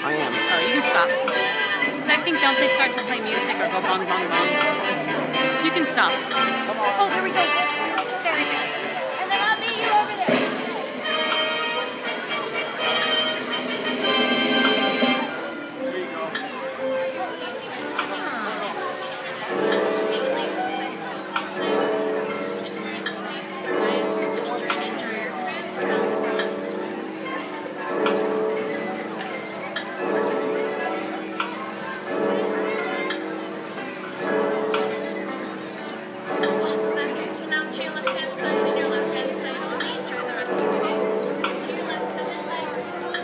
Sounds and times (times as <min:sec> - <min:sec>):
Speech: 0:00.0 - 0:01.2, 0:02.1 - 0:05.0, 0:17.3 - 0:27.8, 0:36.4 - 0:43.2.